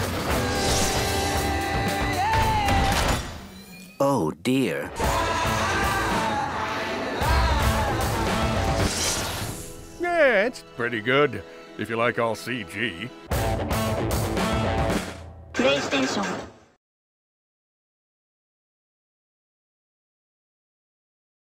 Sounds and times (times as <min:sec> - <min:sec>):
Music: 0:00.0 - 0:03.5, 0:04.9 - 0:16.2
Speech: 0:04.0 - 0:04.9, 0:10.0 - 0:13.1, 0:15.6 - 0:16.4.